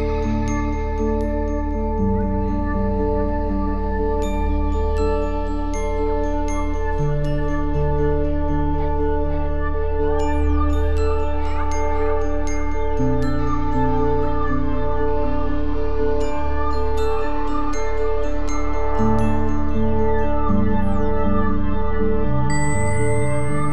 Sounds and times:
Music: 0:00.0 - 0:23.7.

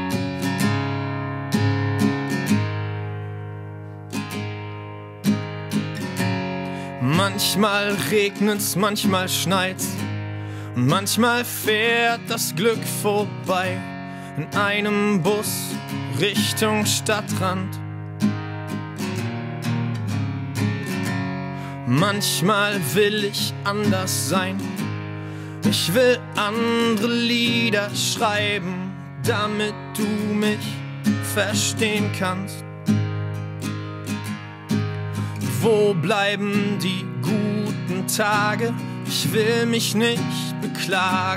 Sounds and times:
Music: 0:00.0 - 0:41.3.

